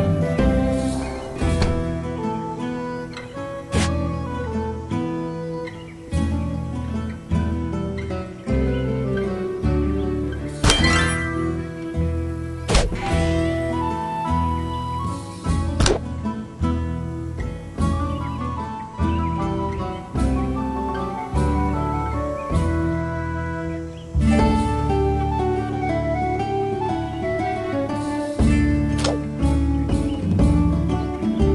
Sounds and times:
Harp: 0.0s - 31.5s.

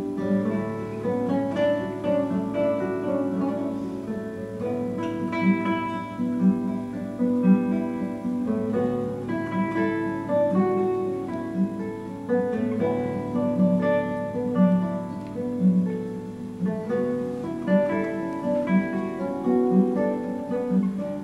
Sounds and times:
Acoustic guitar: 0.0s - 21.2s
Strum: 0.0s - 21.2s.

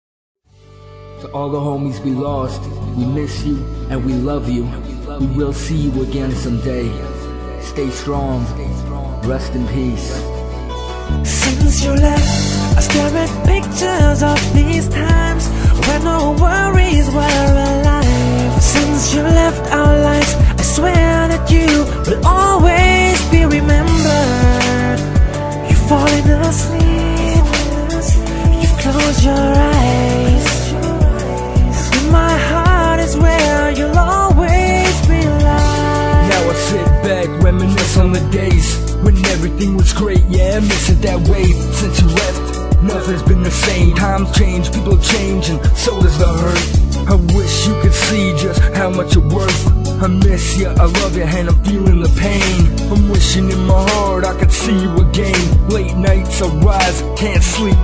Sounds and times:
Music: 0.4s - 57.8s
Speech: 1.2s - 7.0s, 7.6s - 10.4s.

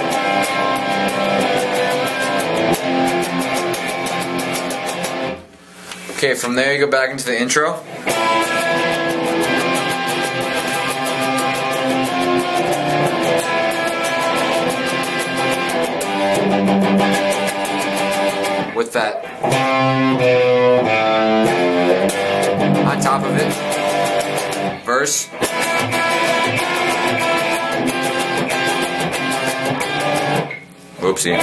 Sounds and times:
Guitar: 0.0s - 31.4s
Inside, small room: 0.0s - 31.4s
Speech: 6.2s - 7.8s, 18.8s - 19.2s, 22.9s - 23.6s, 24.9s - 25.3s, 31.0s - 31.4s.

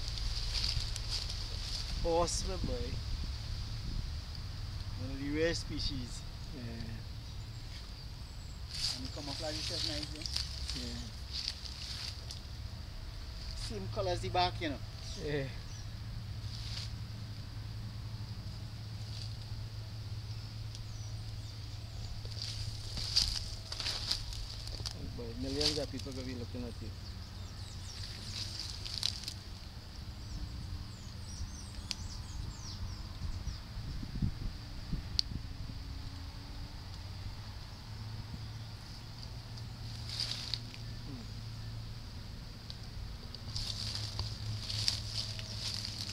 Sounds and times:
Speech: 2.0s - 3.0s, 9.0s - 11.2s, 13.6s - 15.6s, 25.0s - 27.0s.

